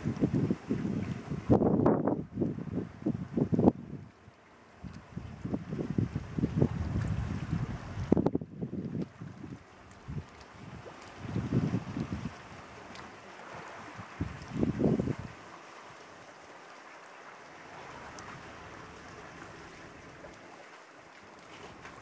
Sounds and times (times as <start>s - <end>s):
Ocean: 0.0s - 22.0s
Outside, rural or natural: 0.0s - 22.0s.